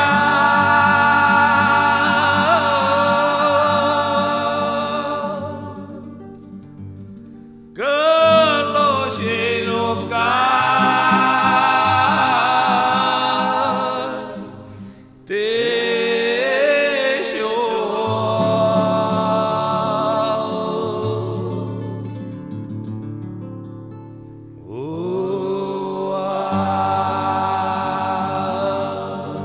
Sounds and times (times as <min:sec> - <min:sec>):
Music: 0:00.0 - 0:29.4.